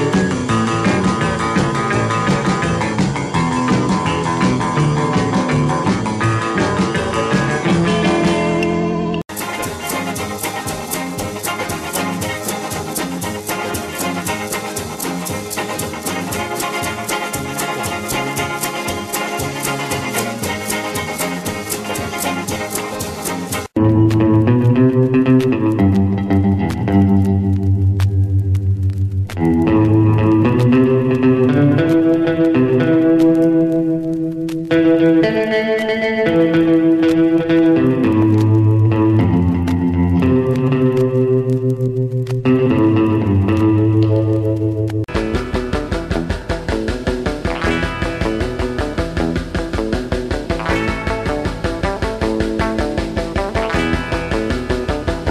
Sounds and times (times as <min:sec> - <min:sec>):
Rock and roll: 0:00.0 - 0:55.3
Swing music: 0:00.0 - 0:55.3.